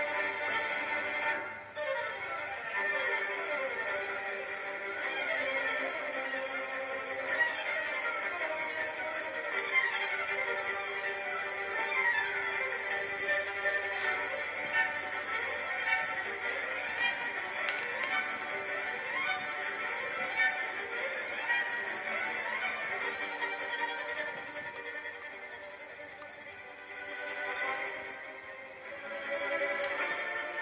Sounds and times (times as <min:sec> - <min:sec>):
Violin, fiddle: 0:00.0 - 0:30.6.